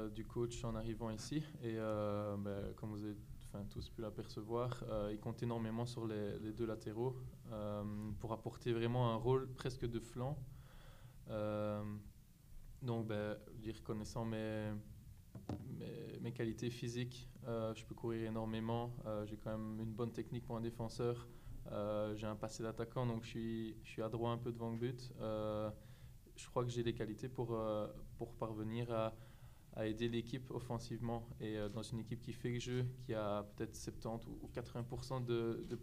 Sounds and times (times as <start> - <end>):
Speech: 0.0 - 10.5, 11.3 - 12.1, 12.8 - 14.9, 15.6 - 35.8.